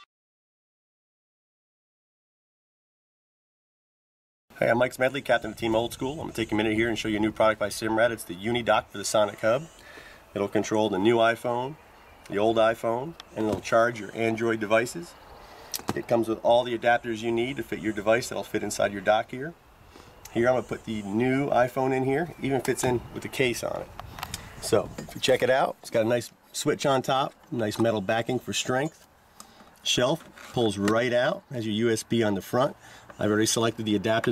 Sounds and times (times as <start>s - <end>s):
Speech: 4.6s - 9.8s, 10.4s - 15.2s, 15.9s - 19.6s, 20.3s - 23.9s, 24.6s - 29.0s, 29.8s - 34.3s.